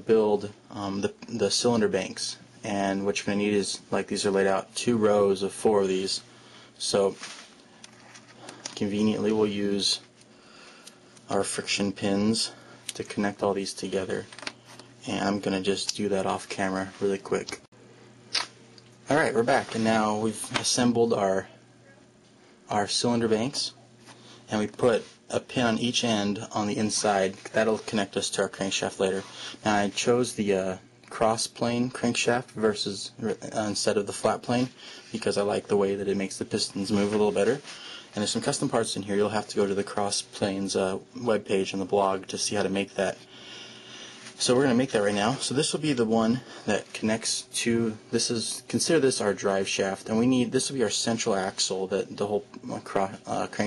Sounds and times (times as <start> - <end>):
Speech: 0.0 - 7.4, 8.7 - 10.1, 11.3 - 14.4, 15.0 - 17.7, 19.1 - 22.1, 22.7 - 23.8, 24.5 - 43.2, 44.4 - 53.6.